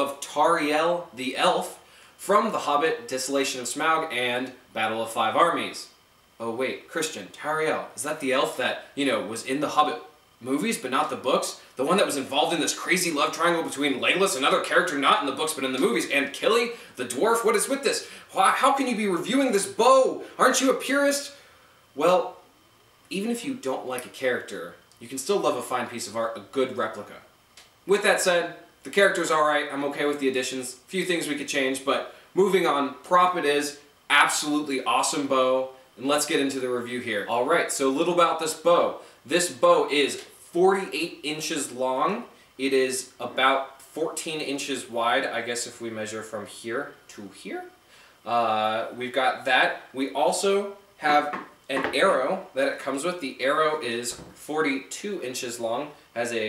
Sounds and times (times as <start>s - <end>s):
Speech: 0.0s - 21.4s, 22.0s - 22.4s, 23.1s - 27.3s, 27.9s - 56.4s.